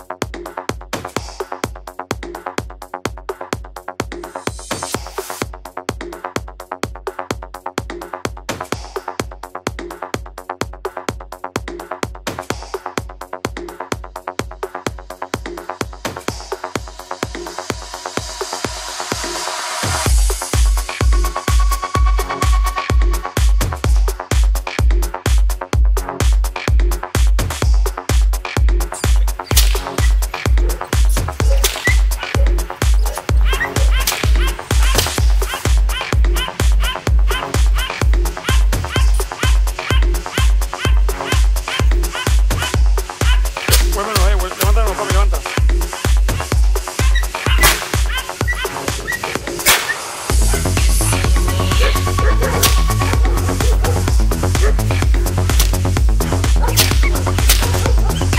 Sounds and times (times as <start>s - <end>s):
Music: 0.0s - 58.3s.